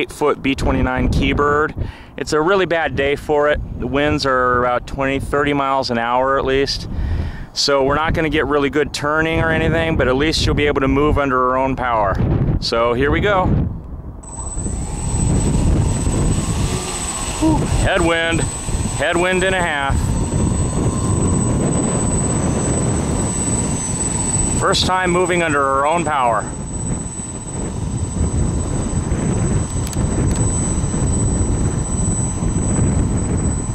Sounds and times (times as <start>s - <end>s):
Fixed-wing aircraft, airplane: 14.2s - 33.7s.